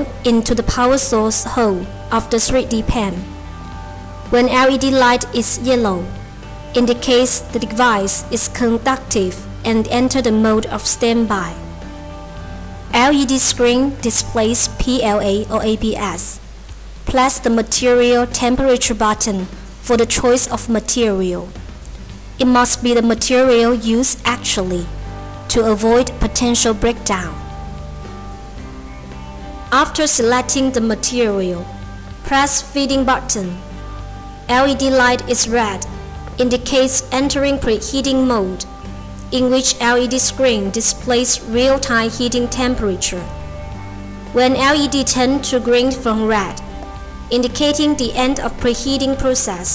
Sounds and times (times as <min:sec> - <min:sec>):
Speech: 0:00.0 - 0:03.3, 0:04.3 - 0:06.1, 0:06.8 - 0:11.6, 0:12.9 - 0:16.4, 0:17.1 - 0:21.6, 0:22.4 - 0:24.9, 0:25.5 - 0:27.4, 0:29.7 - 0:31.7, 0:32.3 - 0:33.6, 0:34.5 - 0:38.7, 0:39.3 - 0:43.3, 0:44.4 - 0:46.6, 0:47.3 - 0:49.7
Music: 0:00.0 - 0:49.7.